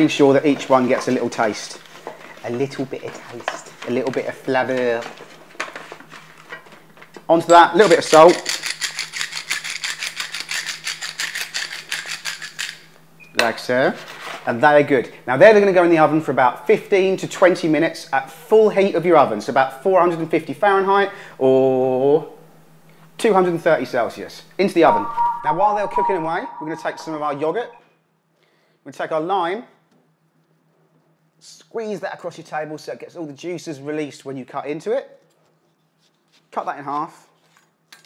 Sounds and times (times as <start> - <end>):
Speech: 0.0 - 1.8, 2.4 - 5.2, 7.3 - 8.5, 13.4 - 22.4, 23.2 - 27.8, 28.9 - 29.8, 31.4 - 35.2, 36.5 - 37.3.